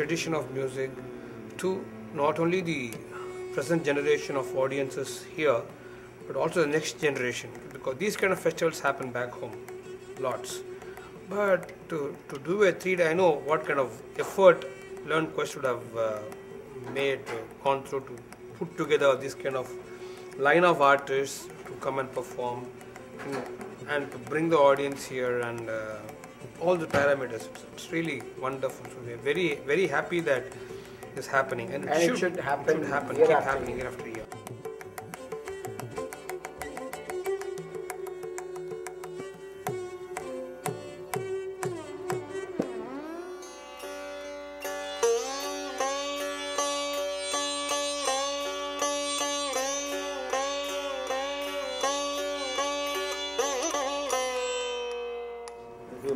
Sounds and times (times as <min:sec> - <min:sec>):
Speech: 0:00.0 - 0:00.9, 0:06.3 - 0:09.6, 0:11.3 - 0:19.7, 0:20.4 - 0:30.5, 0:31.2 - 0:34.3, 0:55.9 - 0:56.1
Classical music: 0:00.0 - 0:56.1.